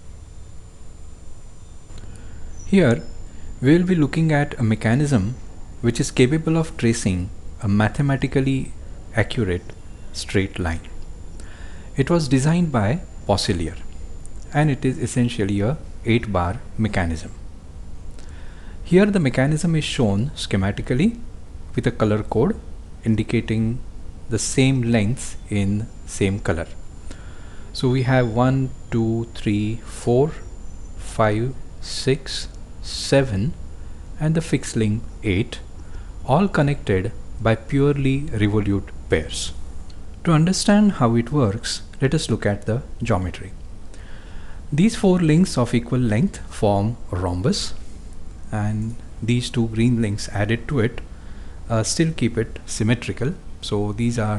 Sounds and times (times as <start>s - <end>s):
Speech: 2.7s - 11.0s, 12.0s - 13.9s, 14.5s - 17.4s, 18.8s - 26.8s, 27.8s - 33.6s, 34.2s - 35.7s, 36.3s - 39.6s, 40.2s - 43.6s, 44.7s - 47.8s, 48.5s - 51.1s, 51.7s - 54.3s.